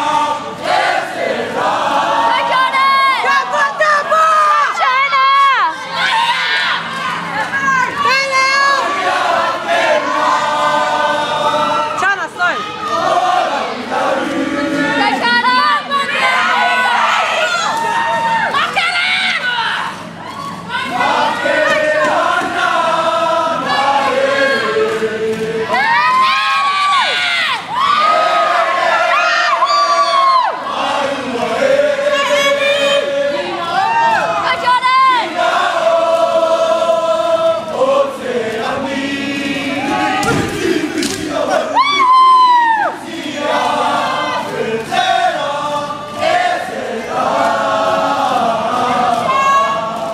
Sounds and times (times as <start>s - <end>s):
Inside, large room or hall: 0.0s - 50.1s.